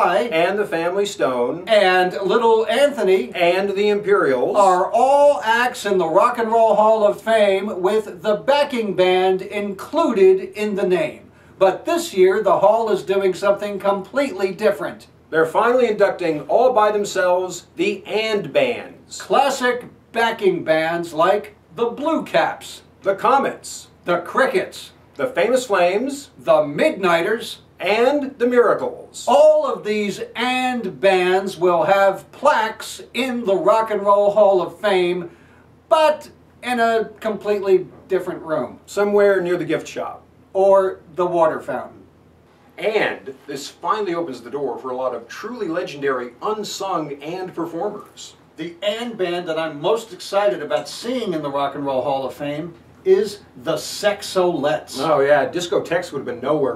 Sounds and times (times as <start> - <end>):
Speech: 0.0 - 35.3, 35.9 - 42.1, 42.8 - 56.7.